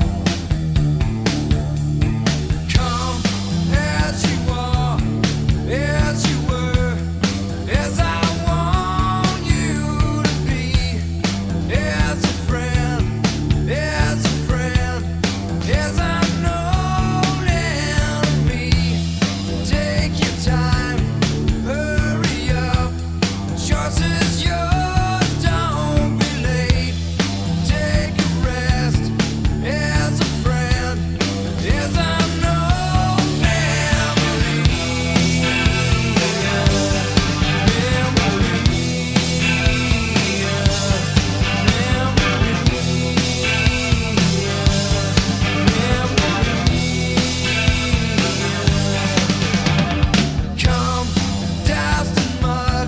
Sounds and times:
Grunge: 0.0s - 52.8s.

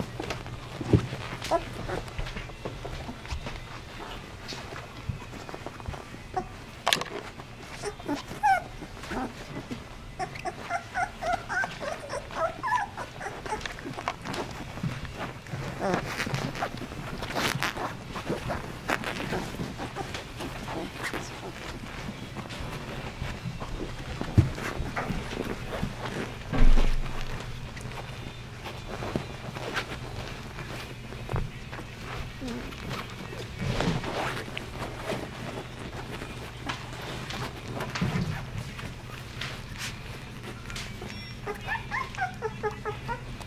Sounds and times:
Canidae, dogs, wolves: 0.0s - 43.4s
Dog: 0.7s - 6.6s, 7.2s - 31.4s, 39.1s - 43.4s.

